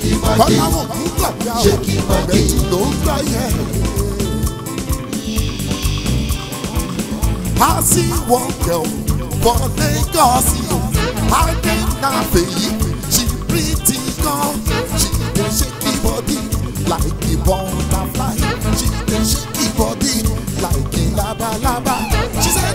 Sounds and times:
Ska: 0:00.0 - 0:22.7.

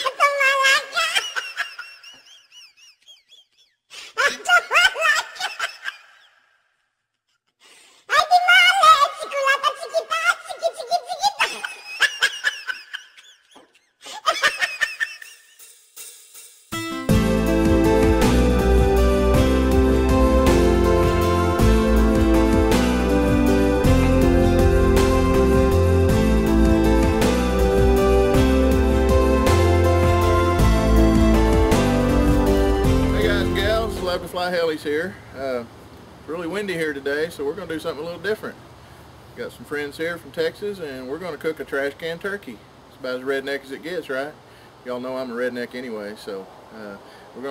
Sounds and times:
Music: 0:15.7 - 0:34.3.

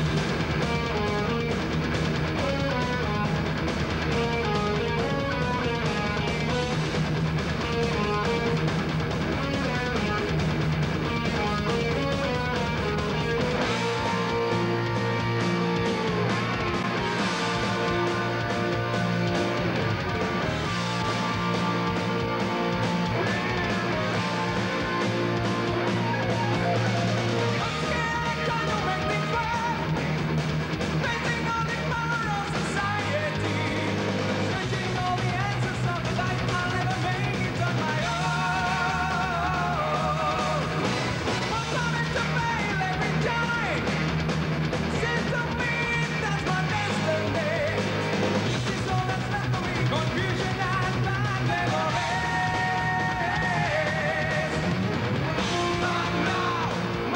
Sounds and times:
Music: 0:00.0 - 0:57.1.

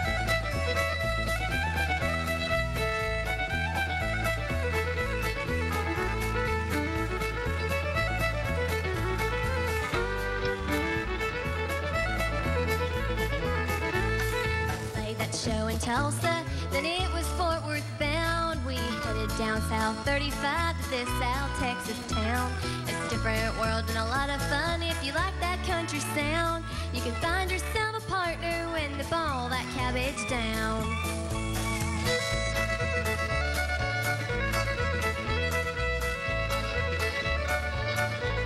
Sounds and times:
Violin, fiddle: 0:00.0 - 0:38.4.

